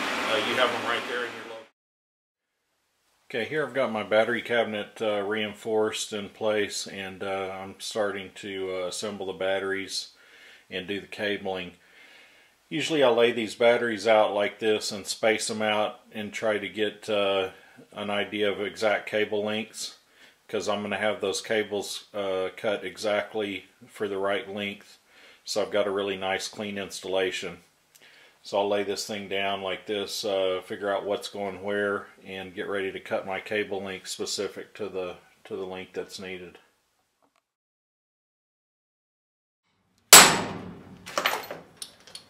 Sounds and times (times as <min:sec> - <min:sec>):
Speech: 0:00.3 - 0:01.8, 0:03.3 - 0:11.8, 0:12.7 - 0:27.7, 0:28.4 - 0:36.7
Inside, small room: 0:02.4 - 0:37.6.